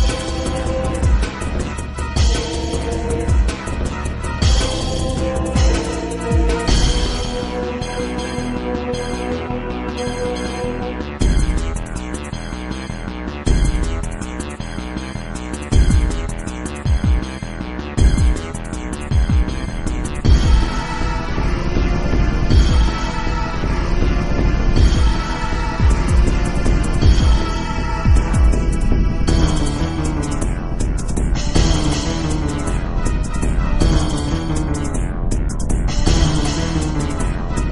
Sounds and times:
Scary music: 0:00.0 - 0:37.7.

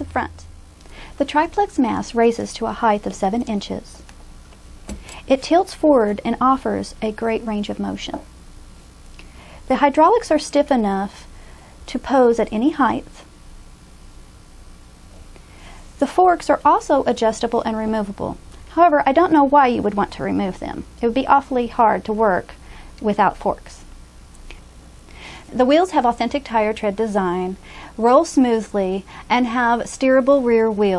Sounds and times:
Speech: 0:00.0 - 0:00.5, 0:01.2 - 0:04.1, 0:05.3 - 0:08.3, 0:09.7 - 0:11.3, 0:11.9 - 0:13.3, 0:16.0 - 0:23.9, 0:25.5 - 0:30.9.

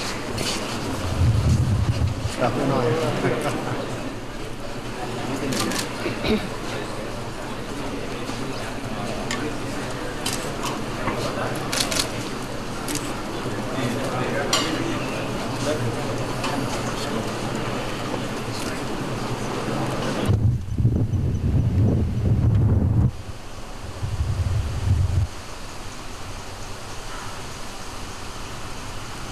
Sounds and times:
Outside, rural or natural: 0:00.0 - 0:03.9, 0:20.2 - 0:29.3.

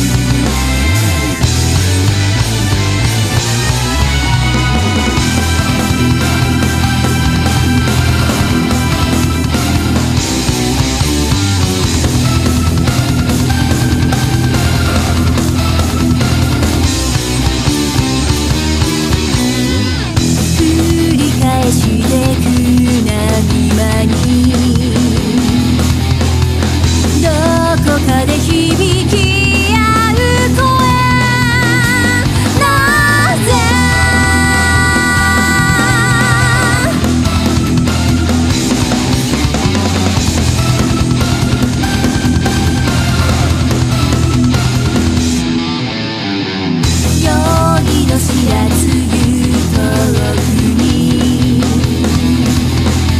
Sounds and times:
Music: 0:00.0 - 0:53.1.

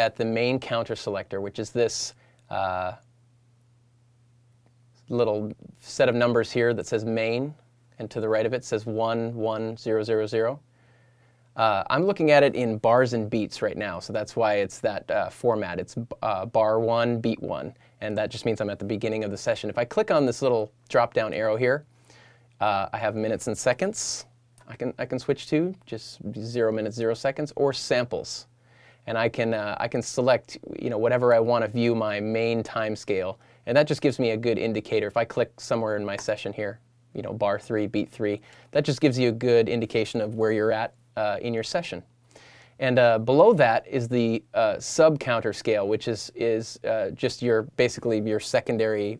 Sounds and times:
Speech: 0:00.0 - 0:03.1, 0:05.0 - 0:10.6, 0:11.6 - 0:21.9, 0:22.6 - 0:42.1, 0:42.8 - 0:49.1.

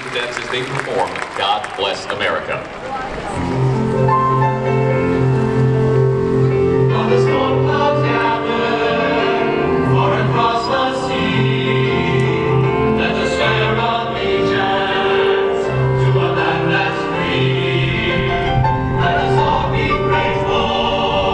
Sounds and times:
Choir: 0:06.5 - 0:21.3.

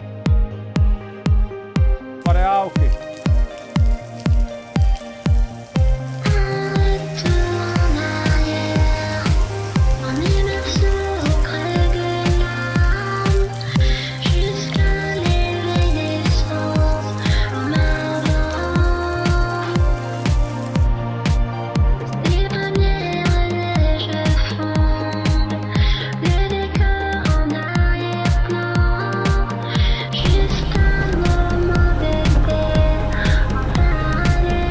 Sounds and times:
Raindrop: 0:02.4 - 0:34.7.

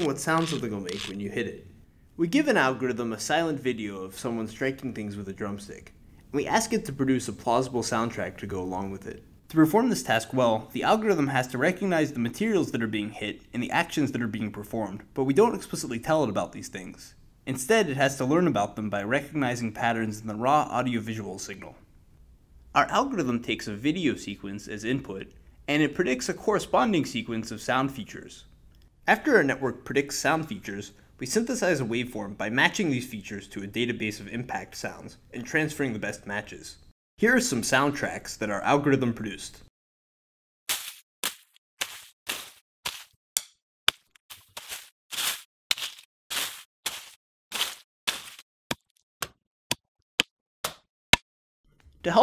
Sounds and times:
Speech: 0:00.0 - 0:21.8, 0:22.8 - 0:28.5, 0:29.1 - 0:39.7.

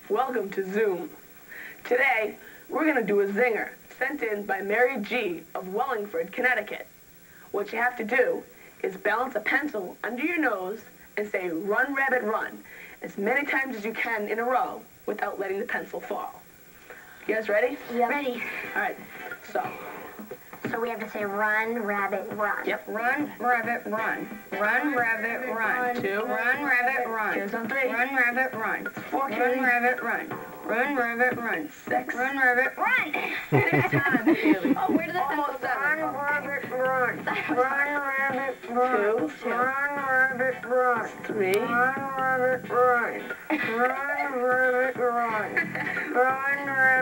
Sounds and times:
Speech: 0:20.7 - 0:47.0.

